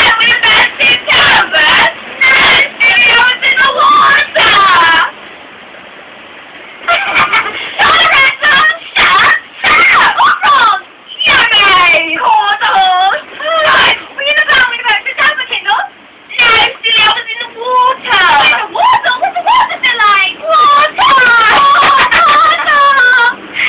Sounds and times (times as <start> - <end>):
Speech: 7.8 - 23.4.